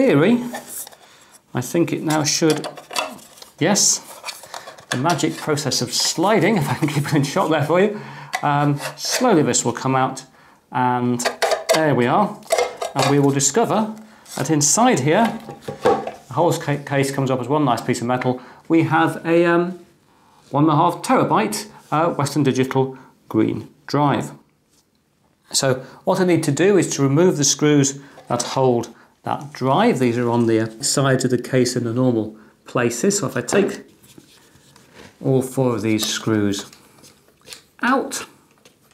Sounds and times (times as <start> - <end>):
Speech: 0.0 - 0.7, 1.5 - 2.7, 3.6 - 4.1, 4.9 - 15.4, 16.3 - 19.8, 20.5 - 24.5, 25.5 - 33.9, 35.2 - 36.8, 37.8 - 38.4
Inside, small room: 0.0 - 38.9.